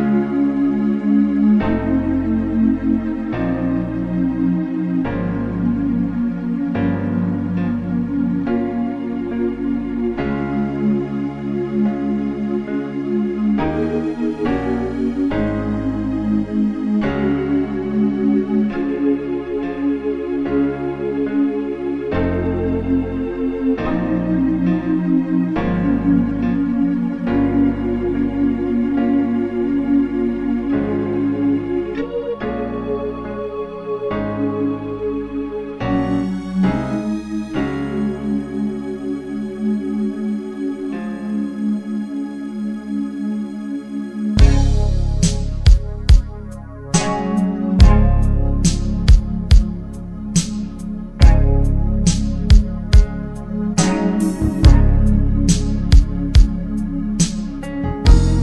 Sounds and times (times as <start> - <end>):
Ambient music: 0.0 - 58.4.